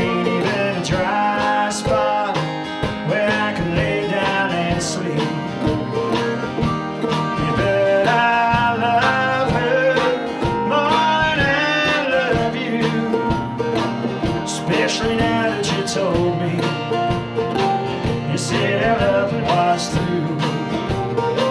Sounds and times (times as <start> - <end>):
Country: 0.0 - 21.5.